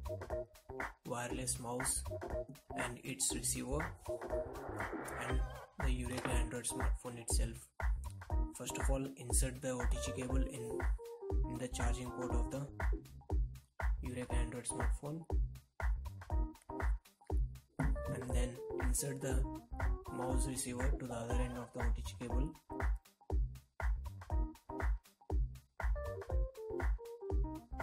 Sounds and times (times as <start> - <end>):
Music: 0.0 - 27.8
Speech: 1.1 - 2.1, 2.8 - 3.9, 5.2 - 7.7, 8.6 - 10.8, 11.5 - 12.7, 14.0 - 15.3, 18.1 - 19.4, 20.1 - 22.6.